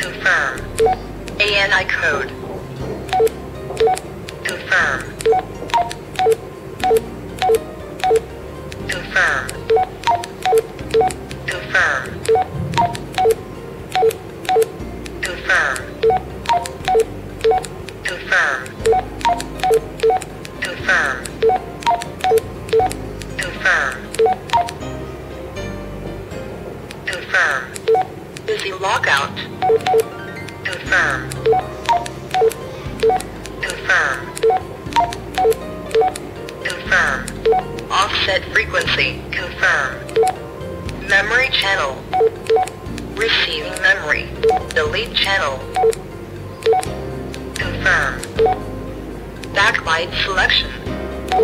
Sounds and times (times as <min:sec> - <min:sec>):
Speech: 0:00.0 - 0:00.8, 0:01.4 - 0:02.5, 0:04.4 - 0:05.2, 0:08.8 - 0:09.6, 0:11.5 - 0:12.2, 0:15.2 - 0:15.9, 0:18.0 - 0:18.8, 0:20.6 - 0:21.3, 0:23.4 - 0:24.1, 0:27.1 - 0:27.8, 0:28.5 - 0:29.5, 0:30.6 - 0:31.3, 0:33.6 - 0:34.4, 0:36.6 - 0:37.3, 0:37.9 - 0:40.1, 0:41.0 - 0:42.1, 0:43.2 - 0:45.7, 0:47.6 - 0:48.3, 0:49.6 - 0:50.9
Music: 0:00.0 - 0:51.4
Telephone dialing, DTMF: 0:00.7 - 0:01.1, 0:03.1 - 0:04.6, 0:05.2 - 0:08.2, 0:08.9 - 0:14.8, 0:16.0 - 0:17.7, 0:18.8 - 0:23.5, 0:24.1 - 0:24.8, 0:27.8 - 0:28.1, 0:29.6 - 0:30.1, 0:31.3 - 0:33.8, 0:34.4 - 0:37.7, 0:40.1 - 0:40.4, 0:42.1 - 0:42.8, 0:44.4 - 0:46.0, 0:46.6 - 0:46.9, 0:48.2 - 0:48.6.